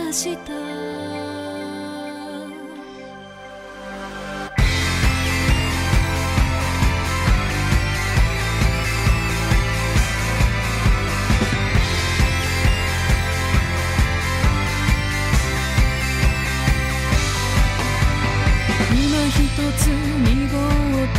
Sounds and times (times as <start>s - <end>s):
Music: 0.0s - 21.1s.